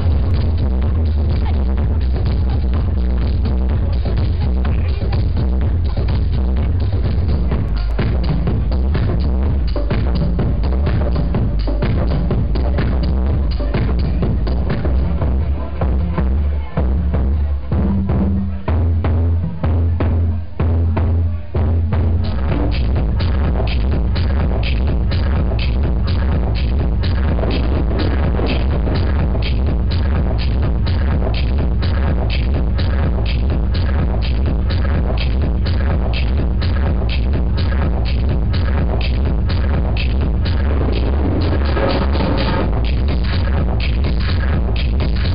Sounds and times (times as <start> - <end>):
Music: 0.0 - 45.3
Speech: 1.2 - 8.5, 12.8 - 22.9.